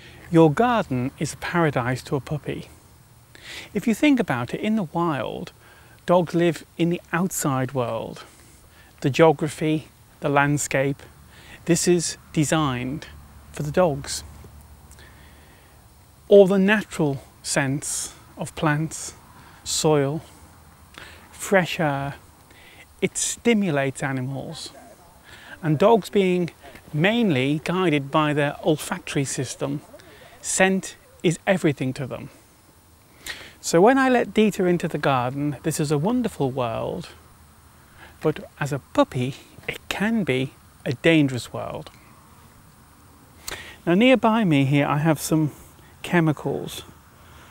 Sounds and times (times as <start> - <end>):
Speech: 0.3 - 2.7, 3.7 - 5.5, 6.1 - 8.3, 9.0 - 14.3, 16.3 - 20.3, 21.4 - 22.2, 23.0 - 32.4, 33.6 - 37.2, 38.2 - 41.9, 43.8 - 46.9.